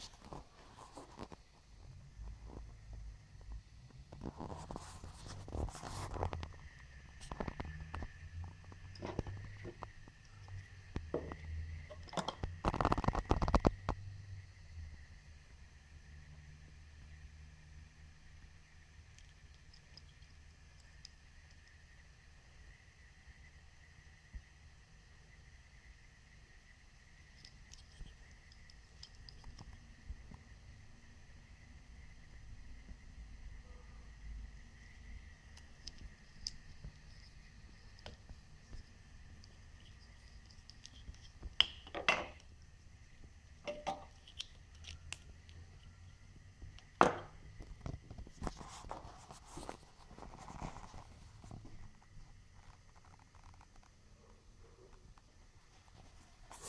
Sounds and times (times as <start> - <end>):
Inside, small room: 0.0 - 56.6.